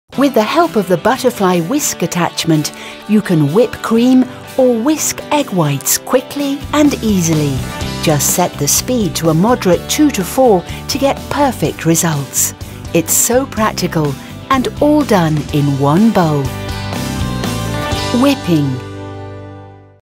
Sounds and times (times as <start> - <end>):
Music: 0.1 - 20.0
Speech: 0.2 - 16.5, 18.1 - 18.8.